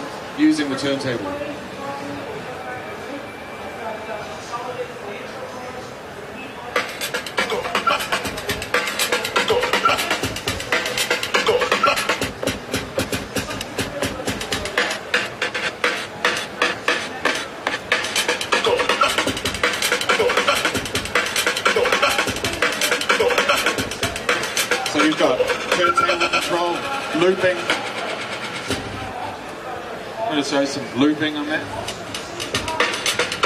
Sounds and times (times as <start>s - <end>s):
Scratching (performance technique): 6.8s - 29.2s, 31.6s - 33.4s.